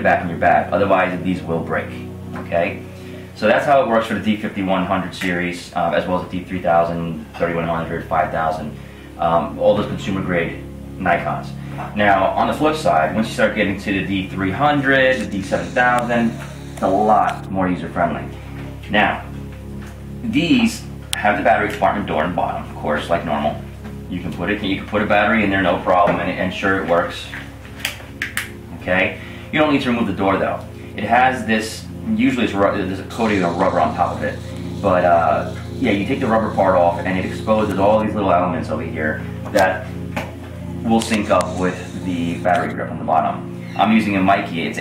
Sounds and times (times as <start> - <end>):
Speech: 0.0 - 2.8, 3.4 - 19.3, 20.2 - 27.5, 28.7 - 39.9, 40.8 - 44.8
Inside, small room: 0.0 - 44.8.